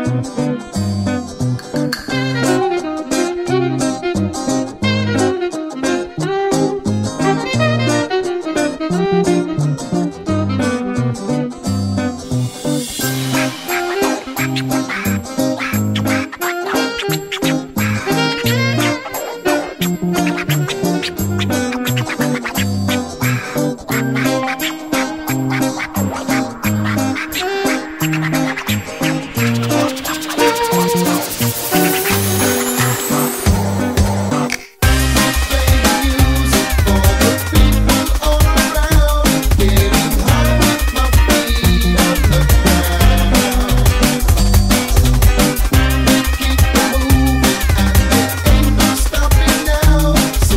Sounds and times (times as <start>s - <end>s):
Music: 0.0s - 50.5s.